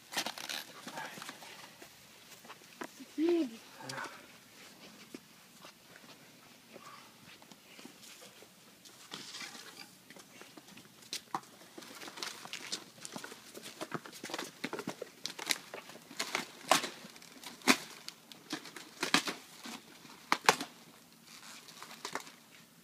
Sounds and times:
Outside, urban or manmade: 0.0 - 22.8
Speech: 3.0 - 4.2.

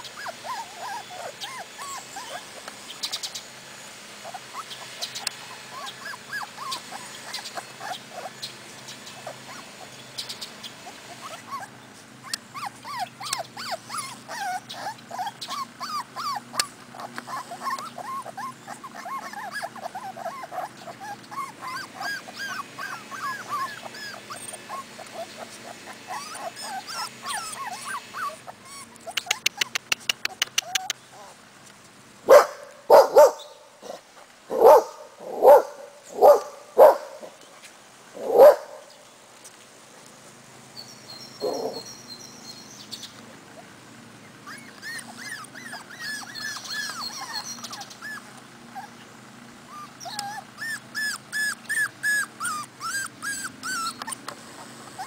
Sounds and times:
Outside, rural or natural: 0.0 - 55.0
Dog: 11.1 - 31.4, 32.3 - 37.3, 38.2 - 38.8, 41.4 - 41.9, 49.7 - 54.2.

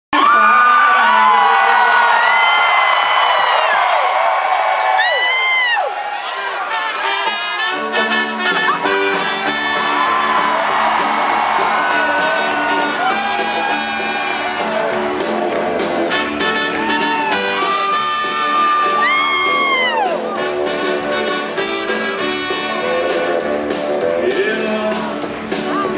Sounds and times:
Pop music: 6.4 - 25.9.

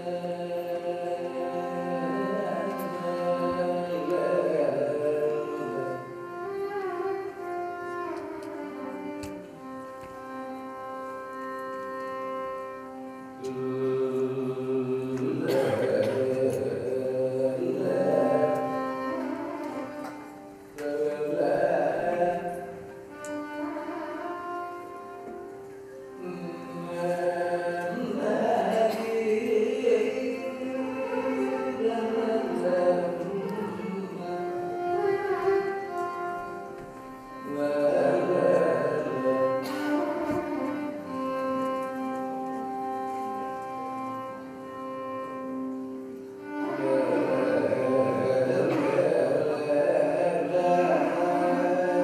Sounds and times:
Classical music: 0.0 - 15.6, 17.5 - 52.0
Carnatic music: 0.0 - 52.0
Singing: 13.4 - 18.8.

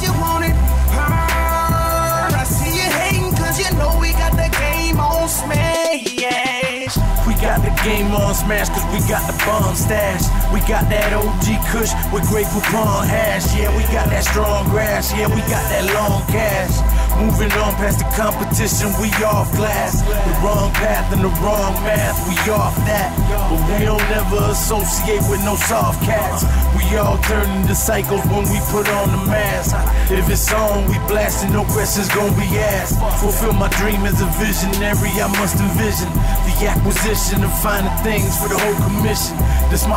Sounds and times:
Music: 0.0 - 39.9.

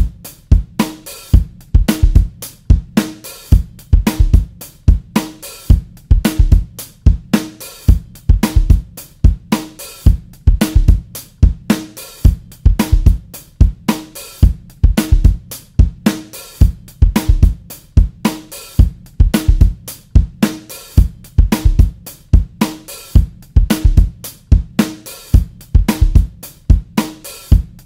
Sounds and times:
Bass drum: 0.0 - 27.8
Drum kit: 0.0 - 27.8.

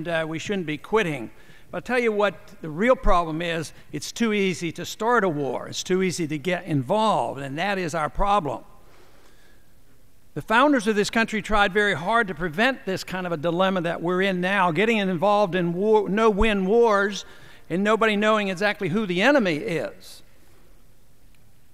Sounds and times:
Male speech, man speaking: 0.0 - 8.7, 10.4 - 20.2
Narration, monologue: 0.0 - 21.7.

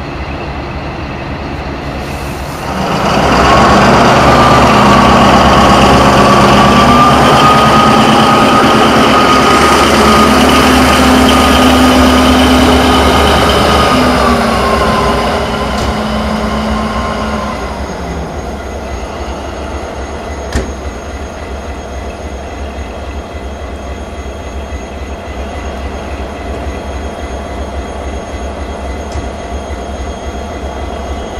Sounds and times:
Railroad car, train wagon: 0.0 - 31.3
Train: 0.0 - 31.3.

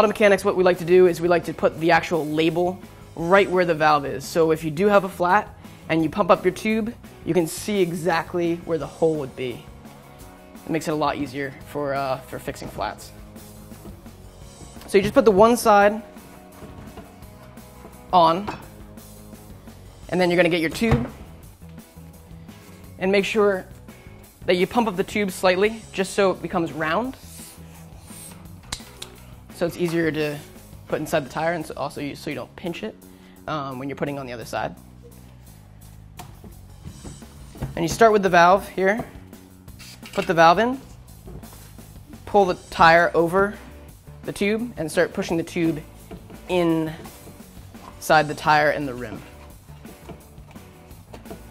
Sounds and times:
Speech: 0.0 - 9.6, 10.7 - 13.1, 14.9 - 16.0, 18.2 - 18.6, 20.1 - 21.1, 23.0 - 23.7, 24.5 - 27.2, 29.6 - 34.8, 37.8 - 39.1, 40.2 - 40.8, 42.3 - 43.6, 44.3 - 45.9, 46.5 - 47.1, 48.0 - 49.3
Music: 0.0 - 51.5.

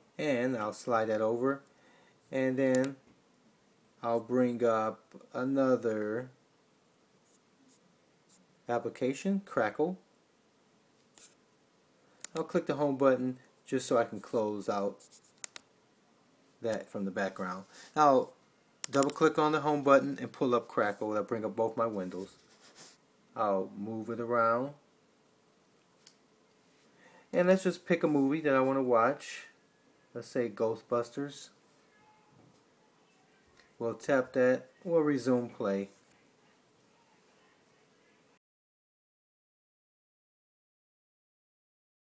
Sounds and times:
Speech: 0.2 - 1.7, 2.3 - 3.0, 4.0 - 6.4, 8.7 - 10.0, 12.4 - 15.0, 16.6 - 22.4, 23.4 - 24.8, 27.4 - 31.6, 33.1 - 38.4.

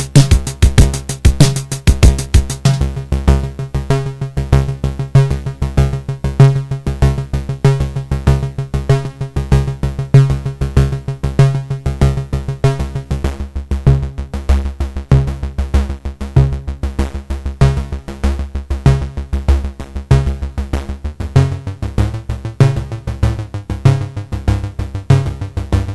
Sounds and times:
Drum machine: 0.0 - 3.2.

